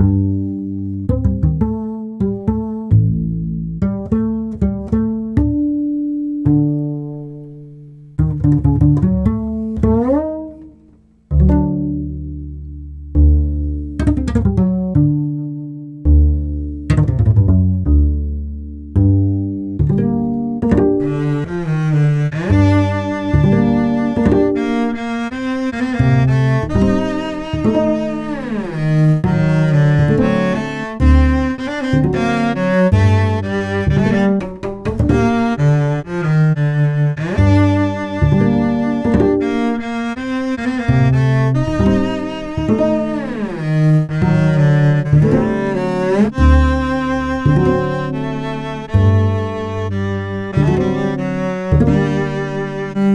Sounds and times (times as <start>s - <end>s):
Music: 0.0s - 53.1s.